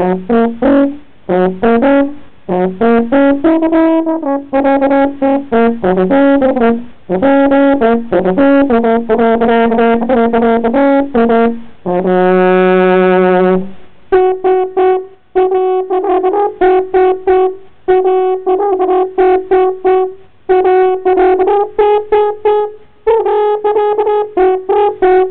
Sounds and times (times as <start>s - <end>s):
Music: 0.0s - 25.3s.